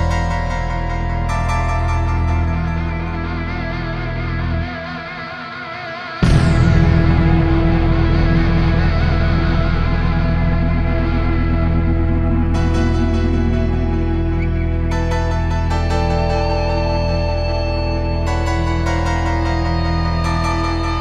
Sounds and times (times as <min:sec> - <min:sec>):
Music: 0:00.0 - 0:21.0
Sound effect: 0:06.2 - 0:21.0.